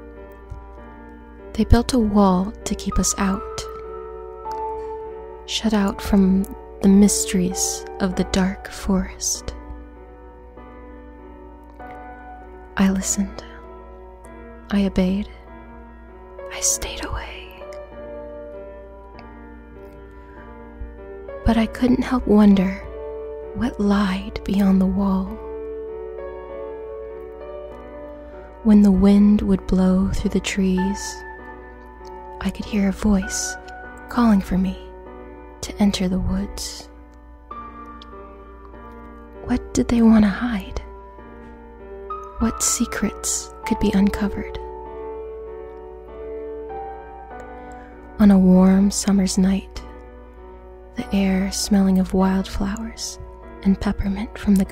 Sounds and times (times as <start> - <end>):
Background music: 0.0 - 54.7
Speech: 1.6 - 3.7, 5.5 - 9.6, 12.8 - 13.6, 14.7 - 15.4, 21.4 - 22.9, 23.6 - 25.4, 28.6 - 31.2, 32.4 - 34.9, 35.6 - 36.9, 39.5 - 40.9, 42.4 - 44.6, 48.2 - 49.8, 51.0 - 54.7.